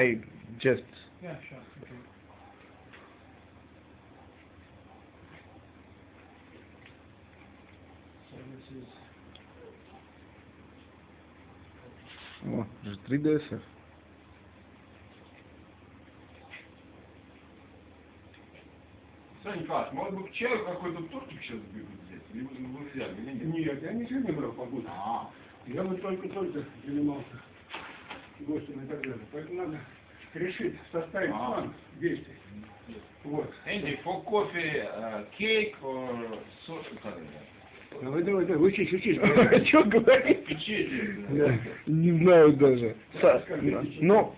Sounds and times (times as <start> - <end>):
Speech: 0.0 - 2.2, 19.4 - 27.5, 28.4 - 44.3.